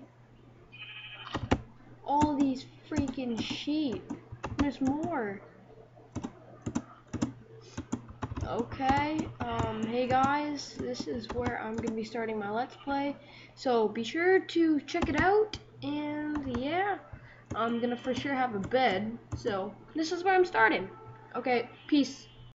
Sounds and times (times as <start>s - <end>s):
Speech: 2.1s - 5.4s, 8.4s - 22.4s.